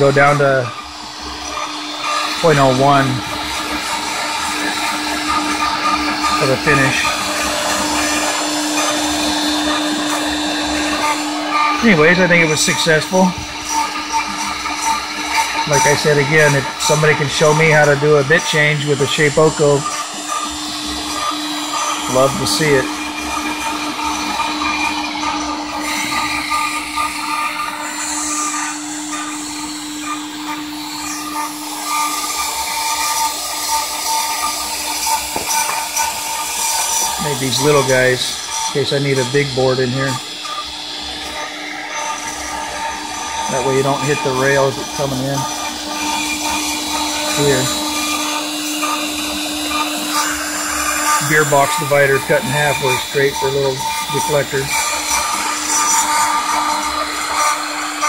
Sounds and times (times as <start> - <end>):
Speech: 0.0 - 0.8, 2.4 - 3.2, 6.4 - 7.1, 11.8 - 13.4, 15.6 - 19.9, 22.1 - 22.9, 37.2 - 40.2, 43.5 - 45.5, 47.3 - 47.8, 51.2 - 54.8.